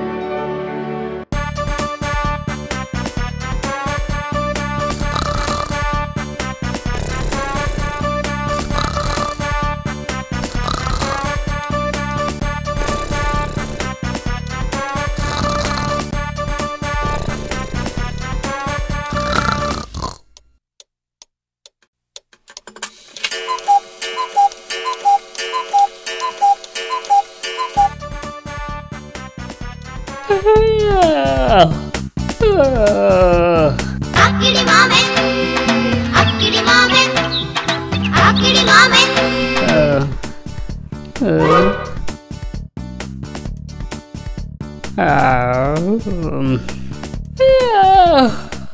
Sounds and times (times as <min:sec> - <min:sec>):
Music: 0:00.0 - 0:19.9, 0:23.3 - 0:48.7.